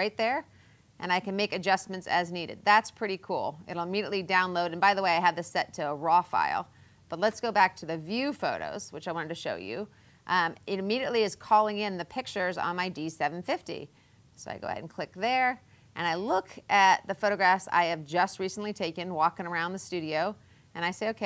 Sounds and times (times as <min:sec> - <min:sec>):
Speech: 0:00.0 - 0:21.2.